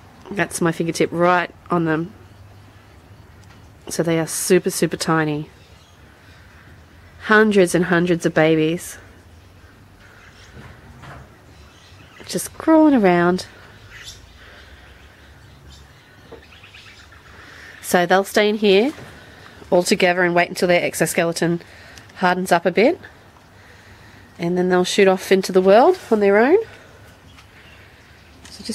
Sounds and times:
Outside, rural or natural: 0:00.0 - 0:28.7
Speech: 0:00.3 - 0:02.2, 0:03.9 - 0:05.5, 0:07.2 - 0:09.1, 0:12.3 - 0:13.6, 0:17.8 - 0:19.0, 0:19.7 - 0:21.6, 0:22.2 - 0:23.1, 0:24.4 - 0:26.7, 0:28.5 - 0:28.7
Bird vocalization, bird call, bird song: 0:05.5 - 0:06.5, 0:09.3 - 0:12.6, 0:13.4 - 0:17.9, 0:27.1 - 0:28.7.

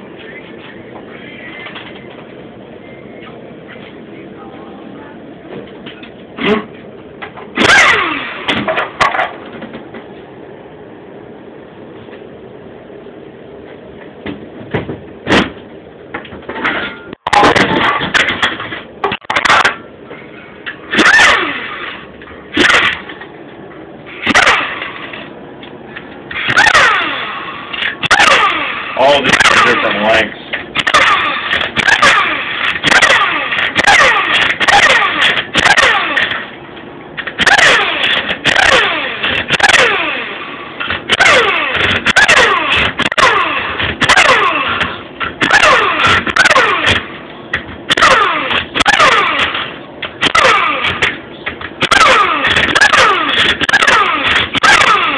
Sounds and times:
Speech: 0:04.1 - 0:05.4, 0:29.0 - 0:30.5.

